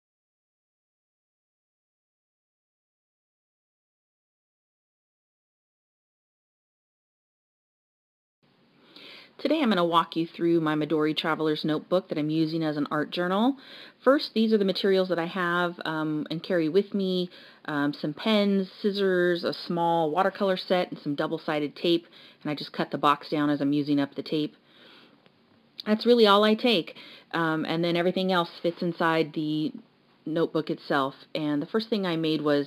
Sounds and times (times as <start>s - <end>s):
Inside, small room: 8.4s - 32.6s
Speech: 9.4s - 24.6s, 25.8s - 32.6s.